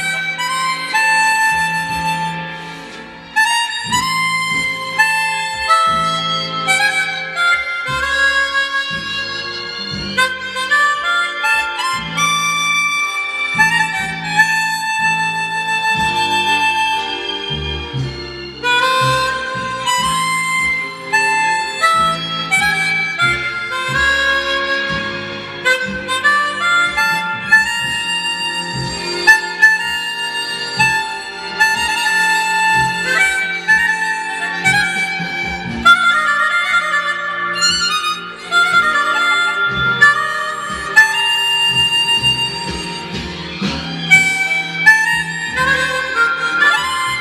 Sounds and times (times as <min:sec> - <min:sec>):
Harmonica: 0:00.0 - 0:47.2.